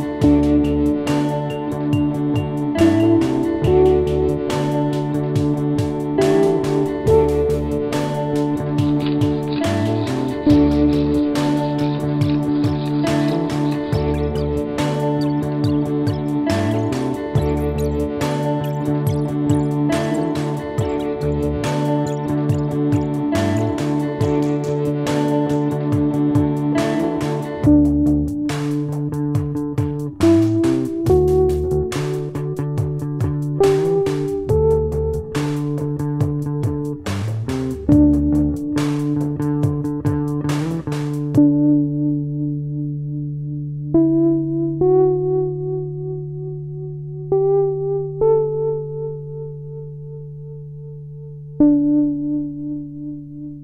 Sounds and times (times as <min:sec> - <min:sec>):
Music: 0:00.0 - 0:53.6.